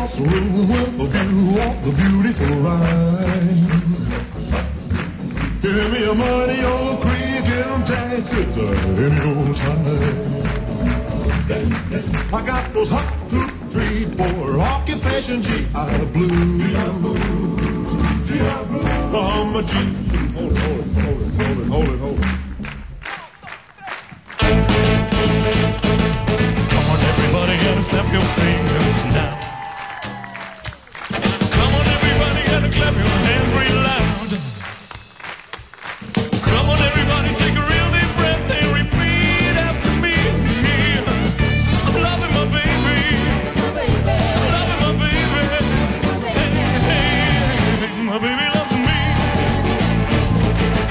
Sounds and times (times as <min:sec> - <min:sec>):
Rock and roll: 0:00.0 - 0:50.9.